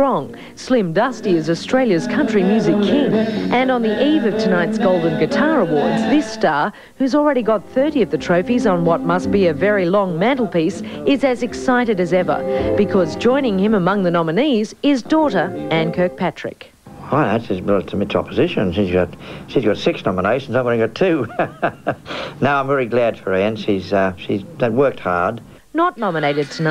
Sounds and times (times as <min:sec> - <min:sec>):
Music: 0:00.0 - 0:21.0
Speech: 0:00.0 - 0:21.3, 0:22.4 - 0:26.7.